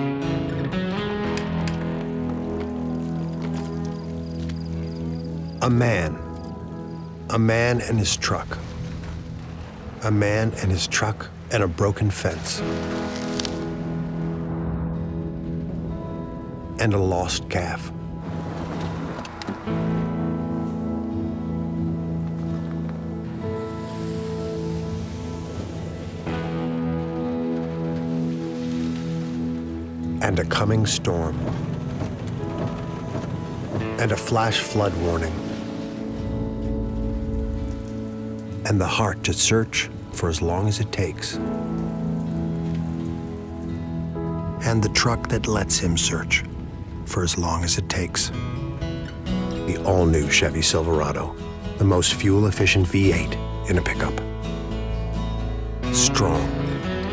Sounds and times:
Music: 0:00.0 - 0:57.1
Speech: 0:05.6 - 0:06.2, 0:07.3 - 0:08.6, 0:10.0 - 0:12.6, 0:16.8 - 0:17.9, 0:30.2 - 0:31.4, 0:34.0 - 0:35.4, 0:38.7 - 0:41.4, 0:44.6 - 0:46.5, 0:47.1 - 0:48.3, 0:49.7 - 0:54.2, 0:55.9 - 0:56.6.

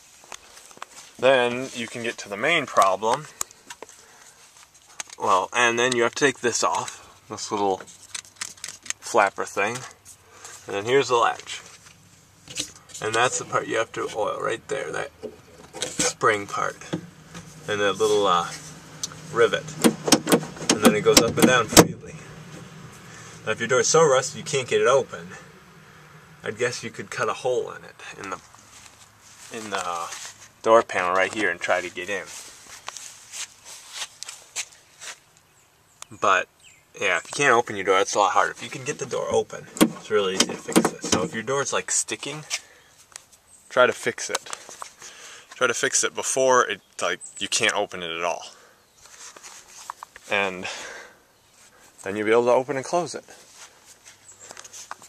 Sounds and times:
Door: 0:19.8 - 0:22.0, 0:39.8 - 0:41.4.

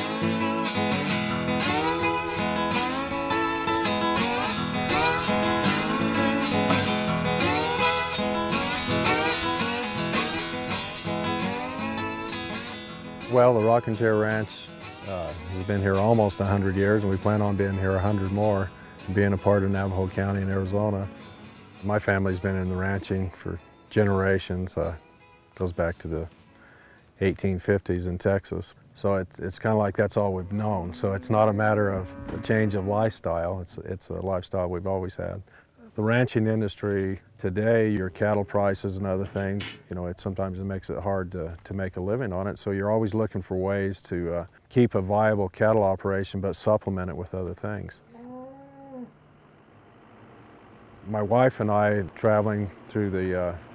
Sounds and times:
Music: 0:00.0 - 0:27.2
Speech: 0:13.3 - 0:21.1, 0:21.8 - 0:25.0, 0:25.6 - 0:26.3, 0:27.2 - 0:48.0, 0:51.1 - 0:53.6.

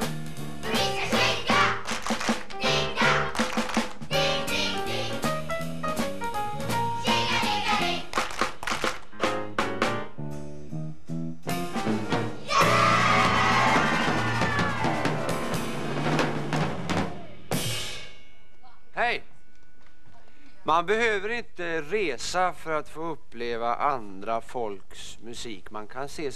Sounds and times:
Music: 0:00.0 - 0:19.9
Speech: 0:20.7 - 0:26.3.

